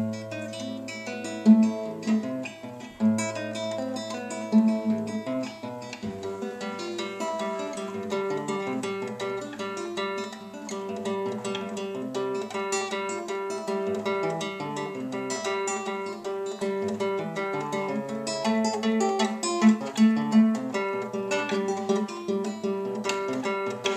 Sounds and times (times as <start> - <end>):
Strum: 0.0 - 23.9.